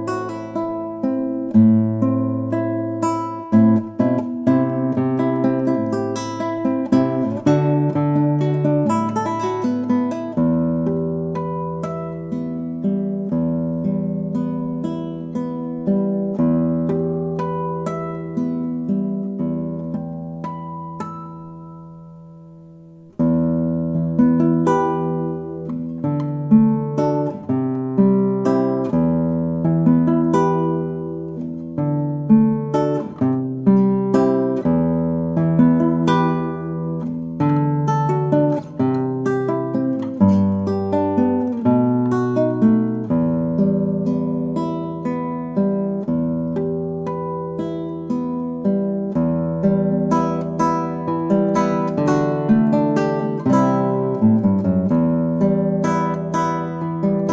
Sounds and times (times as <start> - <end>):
Acoustic guitar: 0.0 - 57.3.